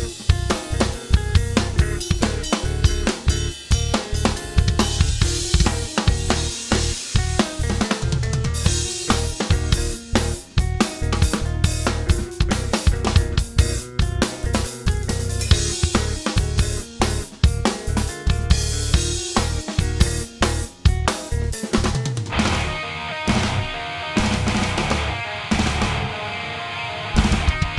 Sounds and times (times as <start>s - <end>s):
Bass drum: 0.0s - 26.1s
Drum kit: 0.0s - 27.7s.